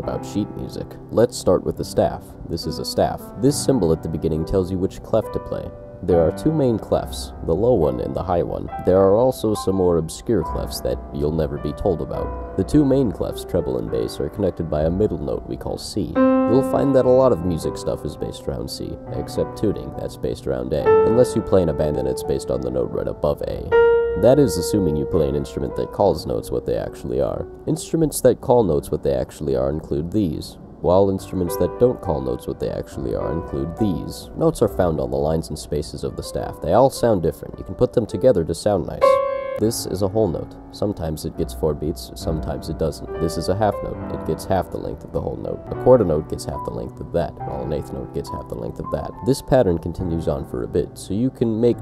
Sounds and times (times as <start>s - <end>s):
Music: 0.0s - 51.8s
Speech: 0.0s - 51.8s.